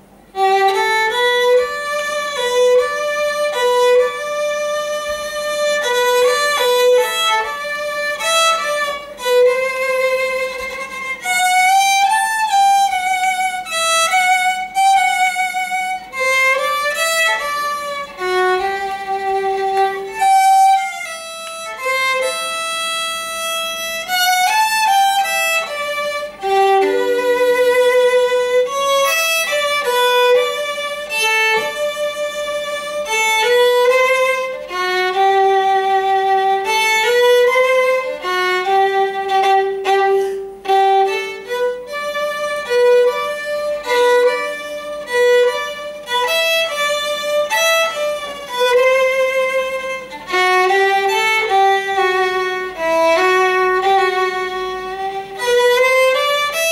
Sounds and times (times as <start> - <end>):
Violin, fiddle: 0.0 - 56.7.